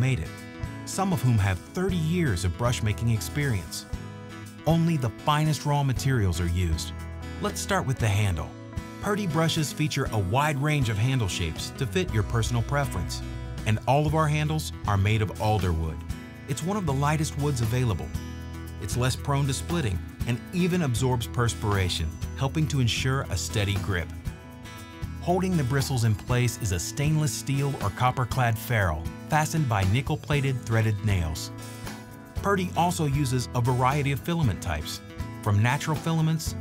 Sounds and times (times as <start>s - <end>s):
Speech: 0.0s - 3.9s, 4.6s - 18.2s, 18.8s - 24.2s, 25.2s - 31.6s, 32.4s - 36.6s
Music: 0.0s - 36.6s.